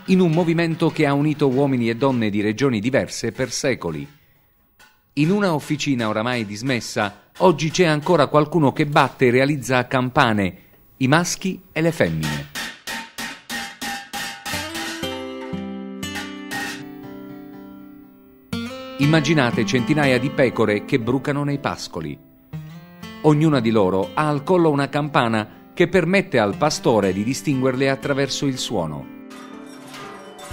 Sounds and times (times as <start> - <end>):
Music: 0.0 - 2.6, 12.2 - 30.5
Speech: 0.0 - 4.1, 5.2 - 12.5, 19.0 - 22.2, 23.2 - 29.1.